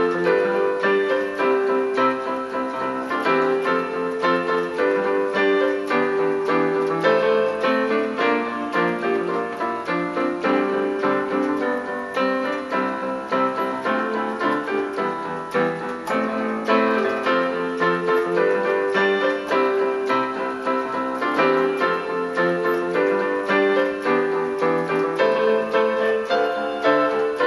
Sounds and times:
Music: 0.0 - 27.4.

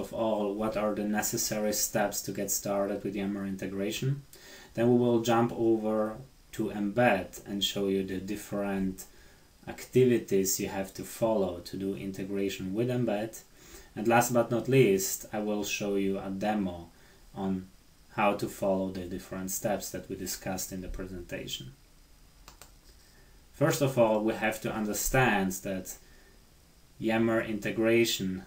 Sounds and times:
Speech: 0.0 - 21.8, 23.6 - 26.0, 27.0 - 28.4.

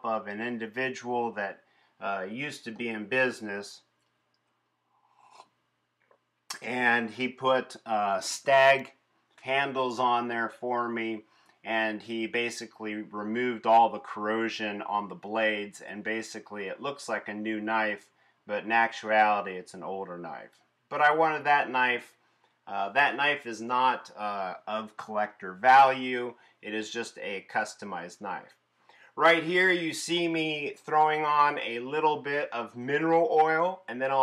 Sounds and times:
Speech: 0.0 - 3.9, 6.5 - 28.6, 29.2 - 34.2.

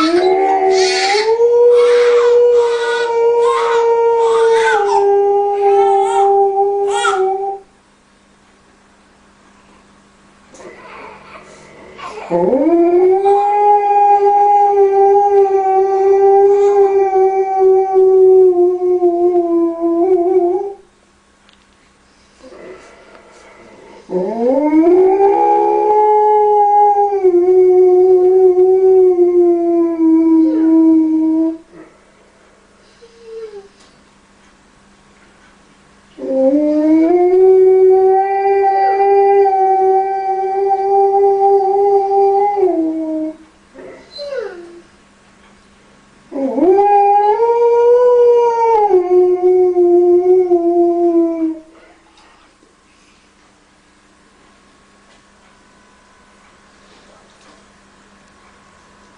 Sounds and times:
Howl: 0.0 - 7.7, 12.1 - 20.8, 24.1 - 31.6, 36.2 - 44.8, 46.3 - 51.8
Whimper (dog): 10.7 - 12.5, 30.3 - 31.0, 33.0 - 33.7, 44.0 - 44.9.

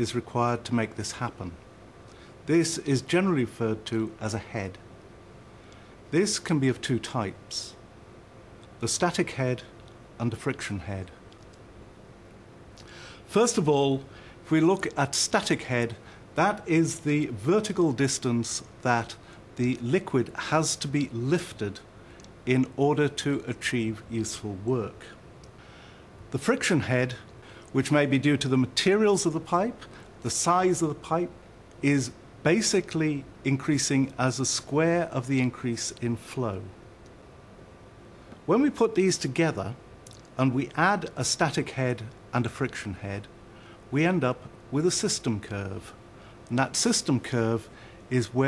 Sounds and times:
Speech: 0.0 - 1.6, 2.4 - 4.8, 6.1 - 7.8, 8.8 - 11.2, 13.3 - 25.2, 26.3 - 36.8, 38.5 - 43.3, 43.9 - 48.4.

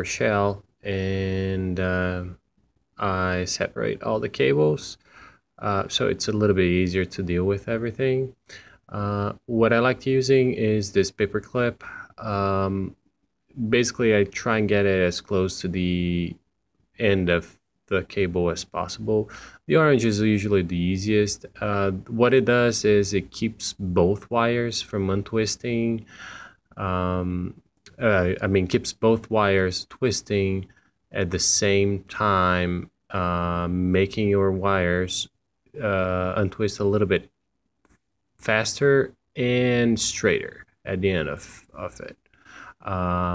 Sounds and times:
Speech: 0.0 - 2.4, 3.0 - 5.0, 5.6 - 26.1, 26.7 - 37.3, 38.4 - 43.3.

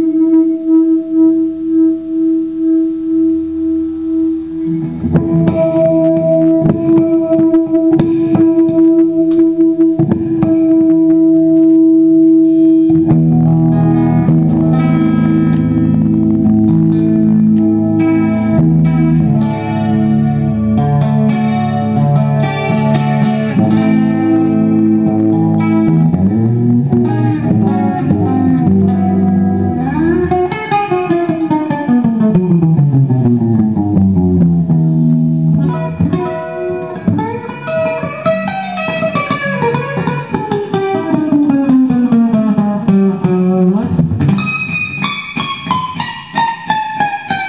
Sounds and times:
Acoustic guitar: 0.0 - 47.4
Strum: 0.0 - 47.4.

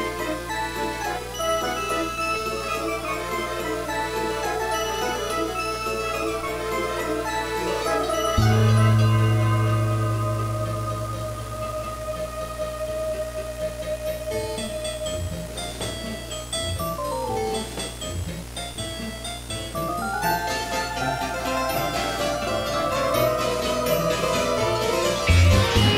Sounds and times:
Soundtrack music: 0.9 - 15.9, 19.8 - 25.9.

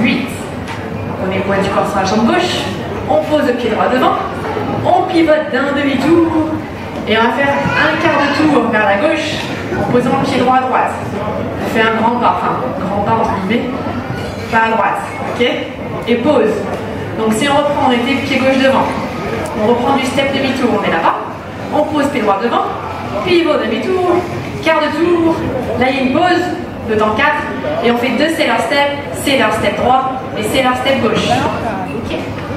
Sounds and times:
Inside, large room or hall: 0.0 - 32.5
Speech: 1.2 - 32.5.

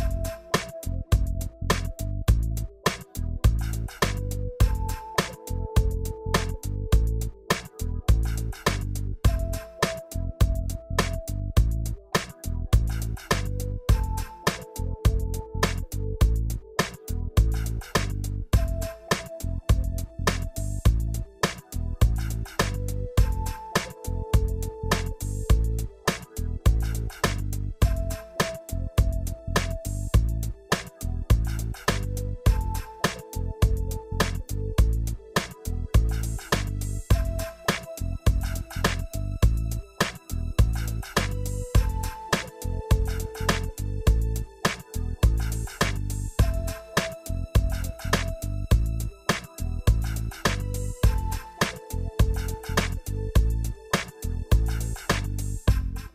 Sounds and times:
Music: 0.0 - 56.1.

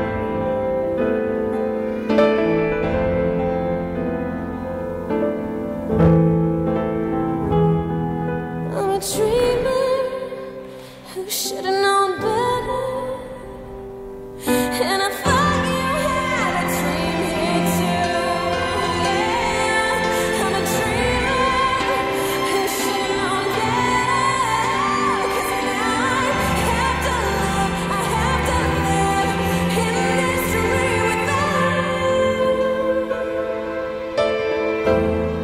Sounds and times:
Piano: 0.0 - 35.4.

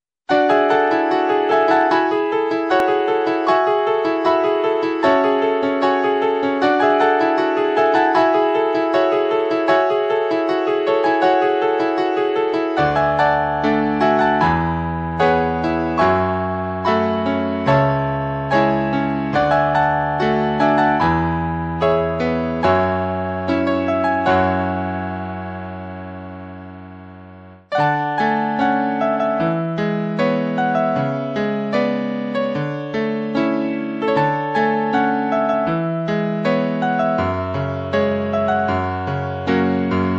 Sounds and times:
Music: 0.3 - 40.1.

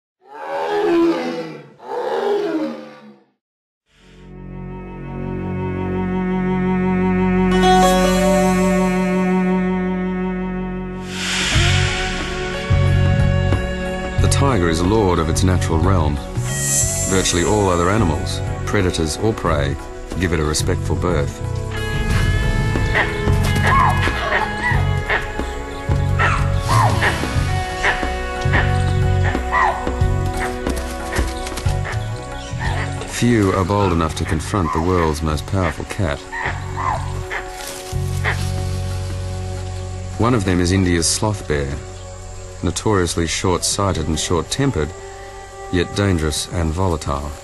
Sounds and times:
Roaring cats (lions, tigers): 0.2 - 3.3
Music: 3.9 - 47.4.

